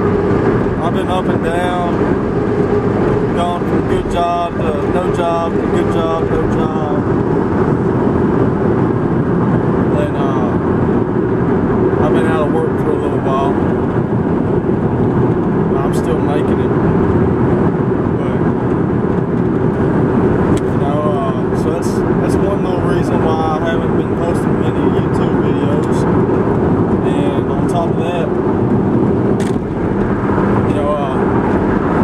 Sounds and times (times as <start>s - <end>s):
Speech: 0.8s - 2.0s, 3.3s - 7.1s, 9.9s - 10.6s, 12.0s - 13.7s, 15.8s - 16.7s, 18.2s - 18.5s, 20.6s - 26.0s, 27.0s - 28.4s, 30.7s - 31.2s.